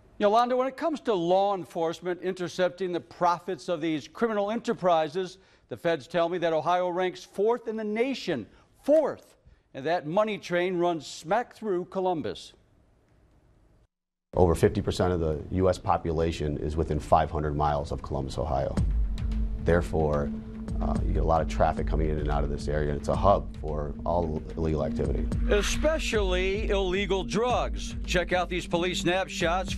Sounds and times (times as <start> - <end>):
Speech: 0.2 - 12.6, 14.4 - 18.8, 19.7 - 29.7
Music: 16.2 - 29.7.